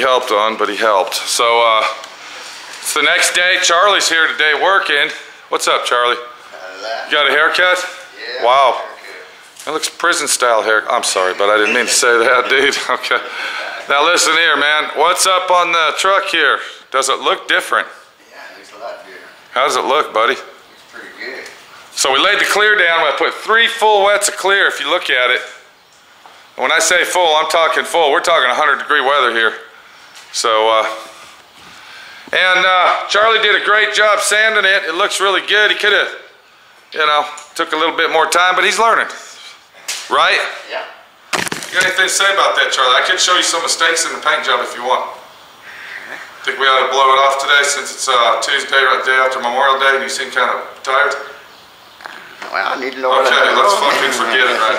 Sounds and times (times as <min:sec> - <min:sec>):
Speech: 0:00.0 - 0:02.0, 0:02.8 - 0:25.6, 0:26.6 - 0:29.7, 0:30.3 - 0:31.1, 0:32.3 - 0:36.3, 0:37.0 - 0:41.0, 0:41.8 - 0:45.2, 0:46.4 - 0:51.4, 0:52.4 - 0:54.7.